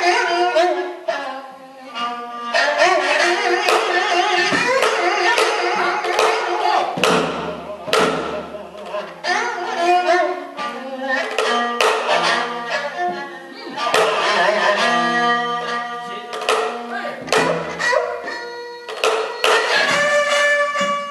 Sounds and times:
Folk music: 0:00.0 - 0:21.1.

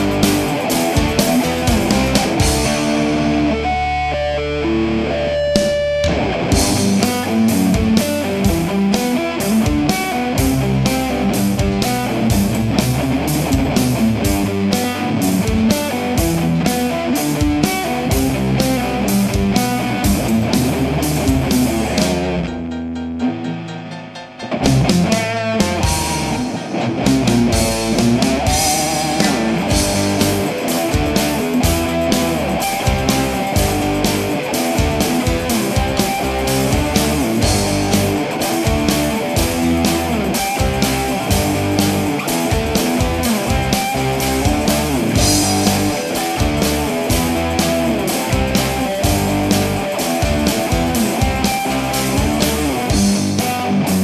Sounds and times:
Electric guitar: 0:00.0 - 0:54.0.

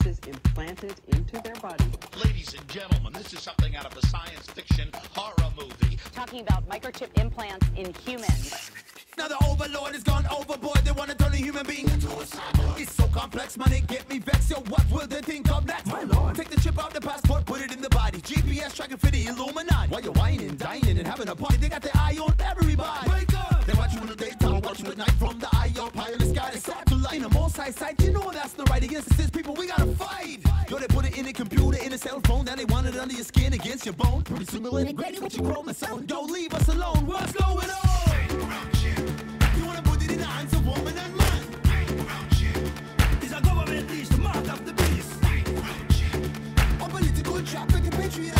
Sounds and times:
Dance music: 0:00.0 - 0:48.3
Independent music: 0:00.0 - 0:48.3
Pop music: 0:00.0 - 0:48.3.

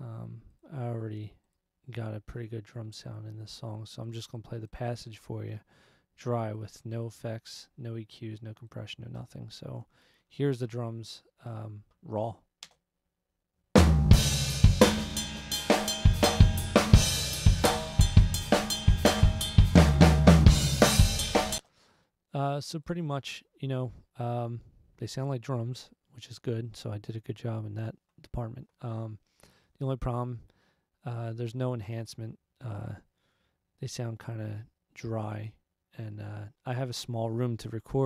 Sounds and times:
Speech: 0:00.0 - 0:12.5, 0:22.3 - 0:29.2, 0:29.8 - 0:33.1, 0:33.8 - 0:38.0
Music: 0:13.8 - 0:21.6.

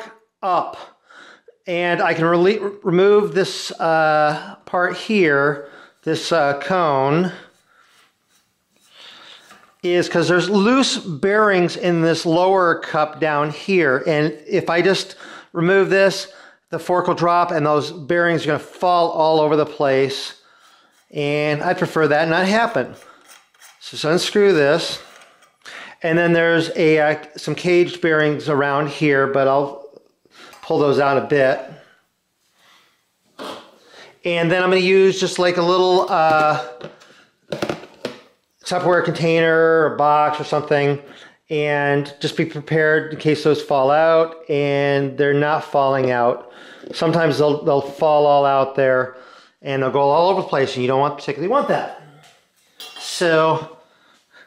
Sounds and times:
Speech: 0:00.0 - 0:01.0, 0:01.6 - 0:07.5, 0:09.8 - 0:20.4, 0:21.1 - 0:23.1, 0:23.8 - 0:25.1, 0:26.0 - 0:30.0, 0:30.6 - 0:31.8, 0:34.2 - 0:36.9, 0:38.6 - 0:52.3, 0:53.0 - 0:53.8.

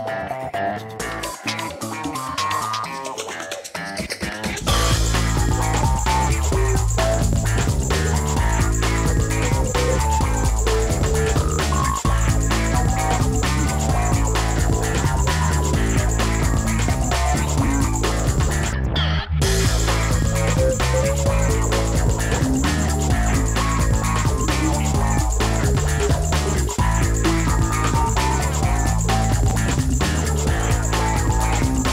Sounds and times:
Music: 0:00.0 - 0:31.9.

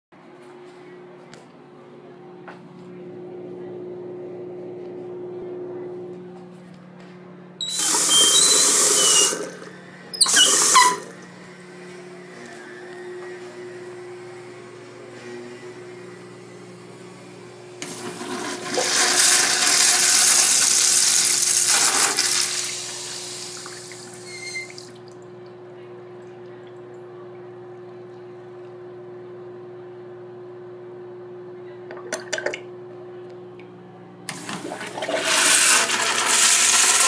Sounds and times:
Pump (liquid): 0:07.6 - 0:11.3, 0:17.8 - 0:25.3, 0:34.3 - 0:37.0.

